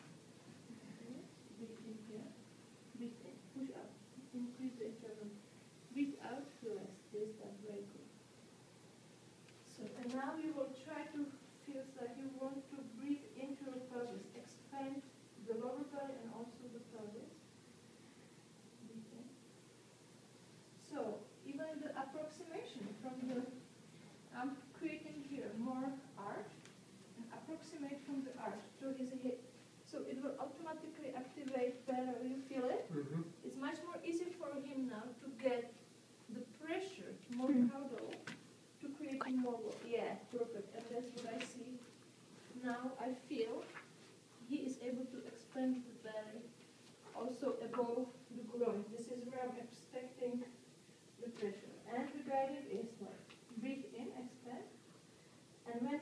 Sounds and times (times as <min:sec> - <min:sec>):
Speech: 0:00.7 - 0:08.1, 0:09.7 - 0:17.4, 0:20.8 - 0:23.6, 0:24.3 - 0:26.6, 0:27.2 - 0:43.8, 0:44.4 - 0:46.5, 0:47.1 - 0:50.6, 0:51.2 - 0:54.8, 0:55.6 - 0:56.0.